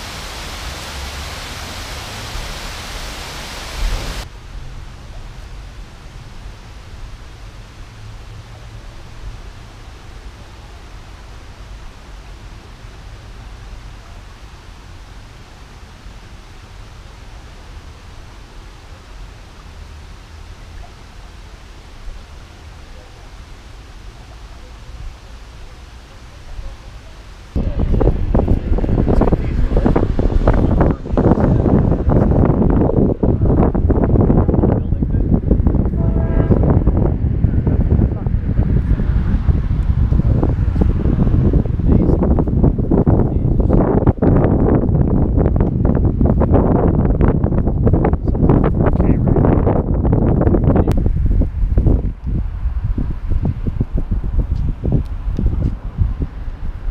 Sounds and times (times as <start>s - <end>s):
Wind noise (microphone): 27.6s - 56.9s.